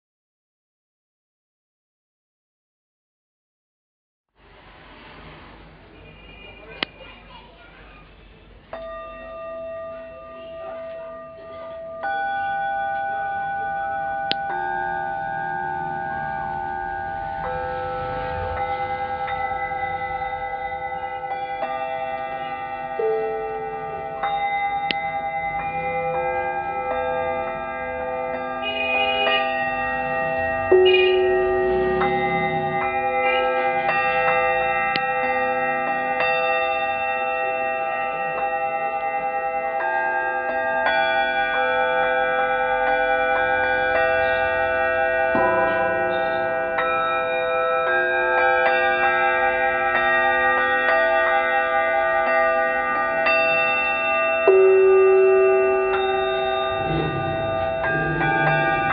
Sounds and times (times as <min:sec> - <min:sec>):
Singing bowl: 0:08.7 - 0:58.9.